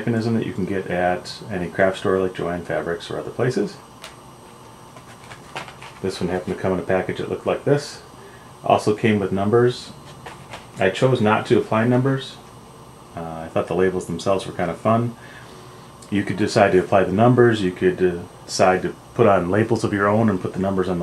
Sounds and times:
Speech: 0:00.0 - 0:03.8, 0:06.0 - 0:10.0, 0:10.8 - 0:12.5, 0:13.2 - 0:15.2, 0:16.0 - 0:21.0.

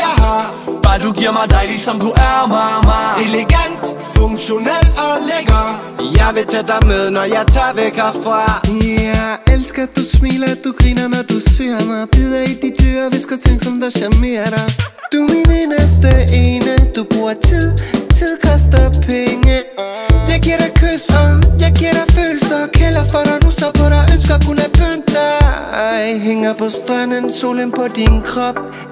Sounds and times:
Dance music: 0:00.0 - 0:28.9.

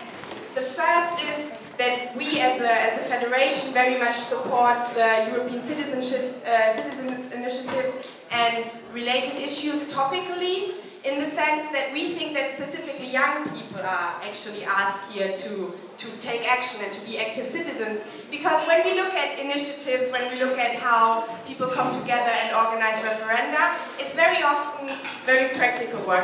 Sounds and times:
Female speech, woman speaking: 0:00.0 - 0:26.2
Narration, monologue: 0:00.0 - 0:26.2.

